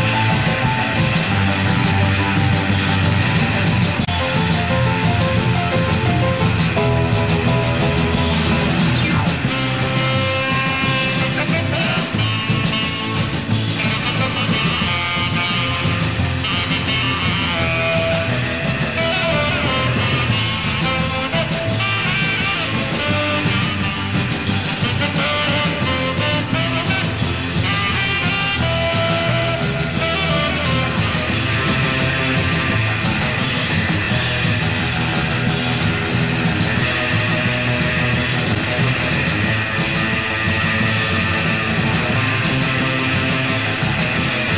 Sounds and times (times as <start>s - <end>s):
Psychedelic rock: 0.0s - 44.5s.